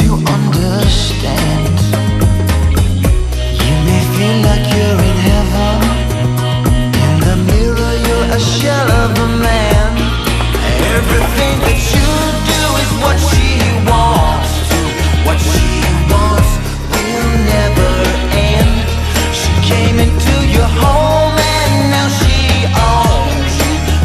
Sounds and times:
Singing: 0:03.6 - 0:06.3, 0:06.9 - 0:24.0.

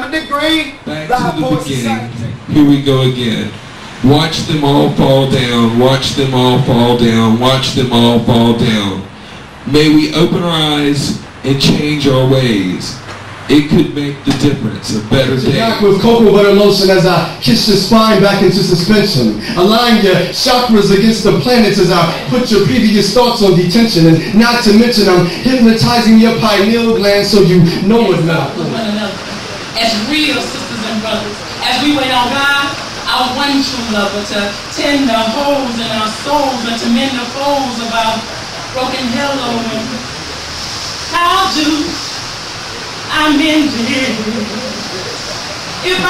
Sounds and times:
Speech: 0:00.0 - 0:09.1, 0:09.7 - 0:40.0.

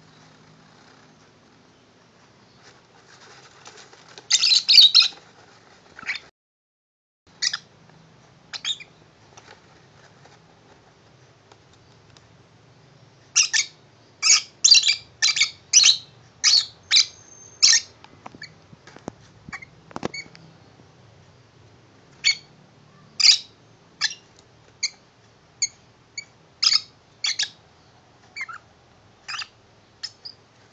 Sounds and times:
Inside, small room: 0:00.0 - 0:06.3, 0:07.3 - 0:30.7
Domestic animals, pets: 0:02.4 - 0:06.3, 0:07.3 - 0:07.7, 0:13.3 - 0:20.5, 0:22.2 - 0:30.4
Bird: 0:03.4 - 0:05.3, 0:06.0 - 0:06.3, 0:07.3 - 0:07.7, 0:08.5 - 0:09.6, 0:13.2 - 0:18.6, 0:22.2 - 0:25.0, 0:25.6 - 0:30.4.

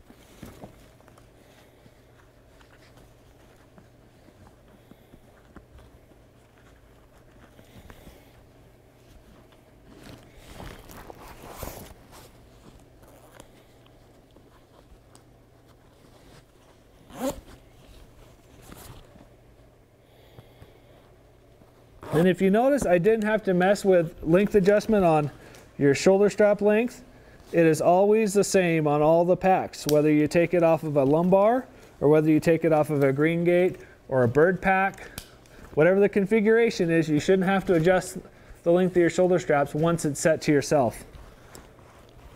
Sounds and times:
Speech: 0:22.1 - 0:35.2, 0:35.8 - 0:41.1.

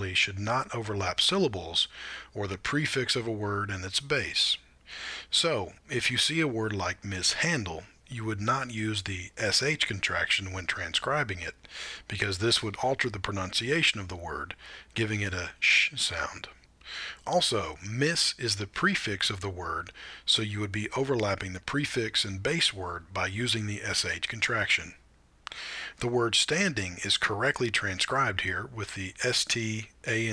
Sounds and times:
Speech: 0:00.0 - 0:04.7, 0:05.3 - 0:16.6, 0:17.2 - 0:25.0, 0:25.9 - 0:30.3.

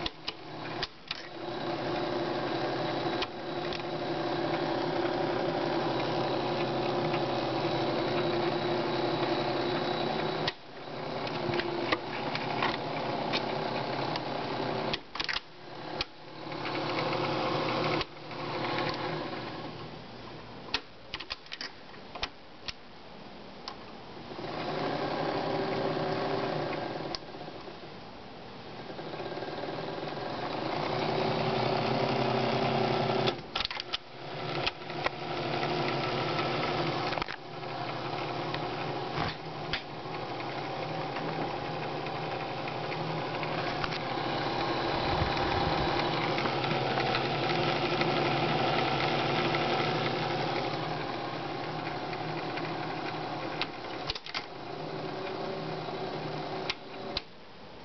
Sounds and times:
Gears: 0:00.0 - 0:10.6, 0:11.2 - 0:19.5, 0:29.1 - 0:57.3
Ratchet, pawl: 0:34.2 - 0:39.1, 0:40.0 - 0:57.1.

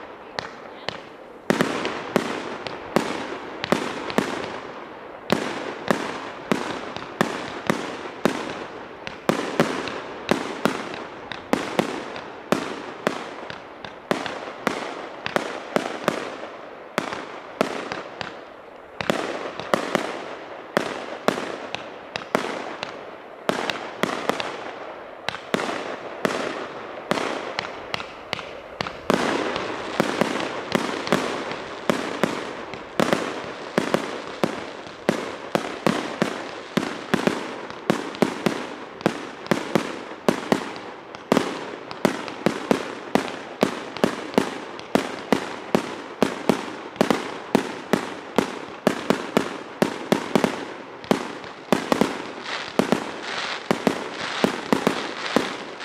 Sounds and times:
Fireworks: 0:00.0 - 0:55.8.

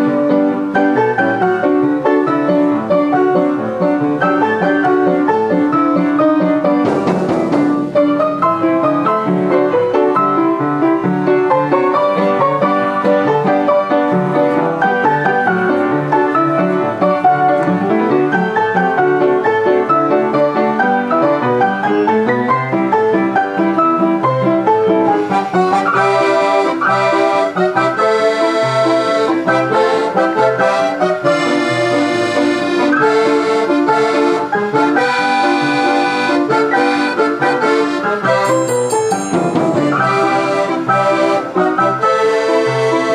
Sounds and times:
Accordion: 0:00.0 - 0:43.1.

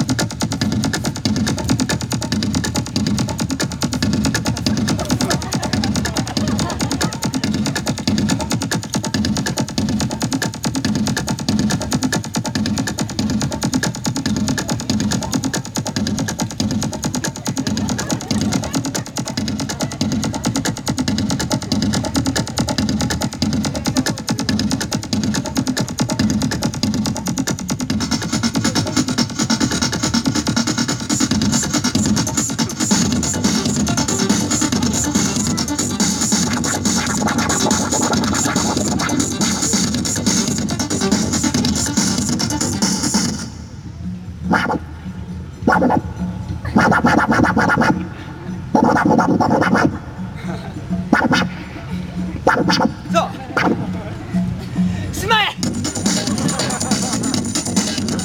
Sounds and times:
Electronic music: 0:00.0 - 0:58.2
Speech: 0:04.9 - 0:08.0, 0:23.6 - 0:24.7, 0:53.1 - 0:54.2, 0:55.1 - 0:55.6.

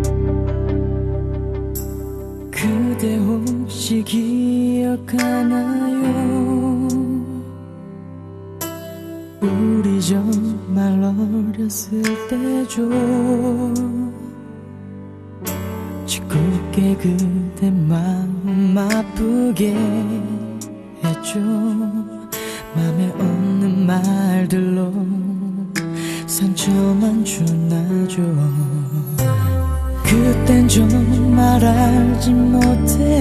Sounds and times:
Music: 0:00.0 - 0:33.2.

